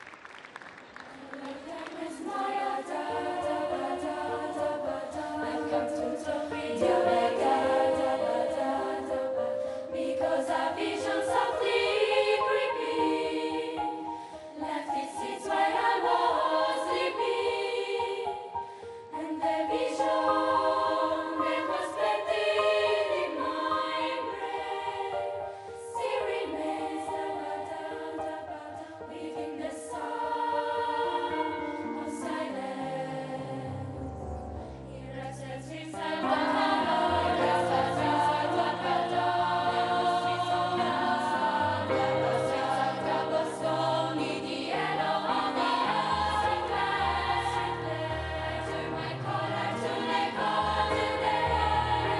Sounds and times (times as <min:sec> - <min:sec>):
Music: 0:00.0 - 0:52.1.